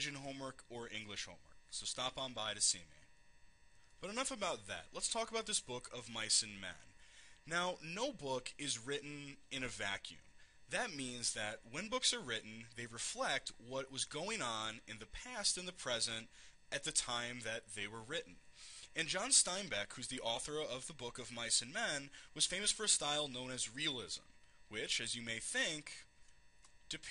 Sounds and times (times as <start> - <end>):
Speech: 0.0 - 3.1, 4.0 - 26.1, 26.9 - 27.1.